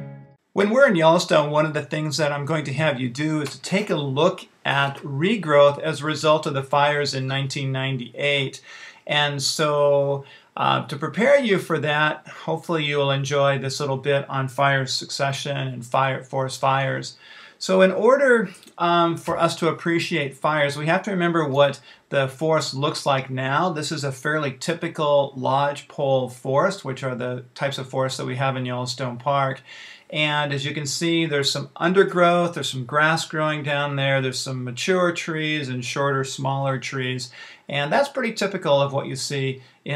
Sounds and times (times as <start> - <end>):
Speech: 0.6 - 39.9.